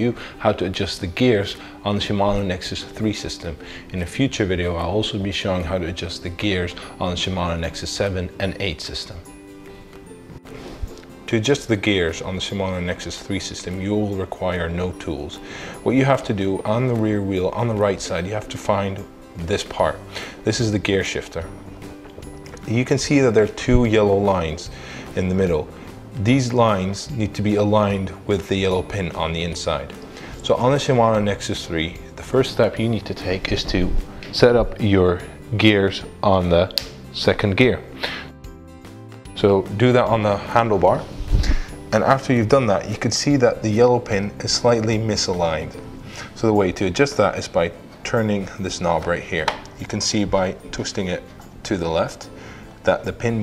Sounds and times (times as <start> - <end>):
Speech: 0.0 - 9.3, 11.3 - 21.6, 22.6 - 37.9, 39.3 - 41.1, 41.9 - 45.8, 46.4 - 53.4
Music: 0.0 - 53.4.